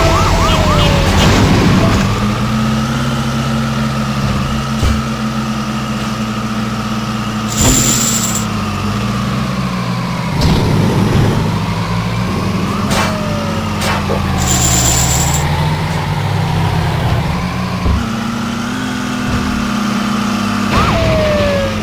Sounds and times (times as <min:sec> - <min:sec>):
Race car, auto racing: 0:00.0 - 0:21.8.